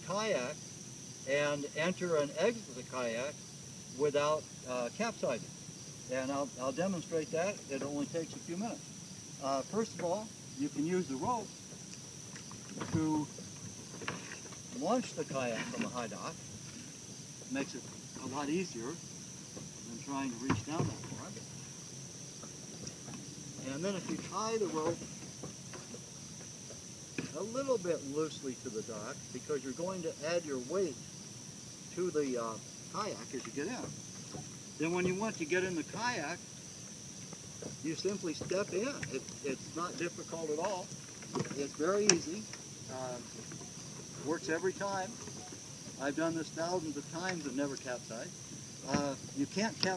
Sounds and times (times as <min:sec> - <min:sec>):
Speech: 0:00.0 - 0:00.6, 0:01.3 - 0:03.4, 0:04.0 - 0:05.4, 0:06.1 - 0:08.8, 0:09.4 - 0:11.5, 0:12.8 - 0:13.3, 0:14.8 - 0:16.4, 0:17.5 - 0:19.0, 0:19.9 - 0:21.4, 0:23.6 - 0:25.0, 0:27.2 - 0:31.0, 0:32.0 - 0:33.9, 0:34.8 - 0:36.4, 0:37.8 - 0:43.3, 0:44.2 - 0:45.2, 0:46.0 - 0:49.9.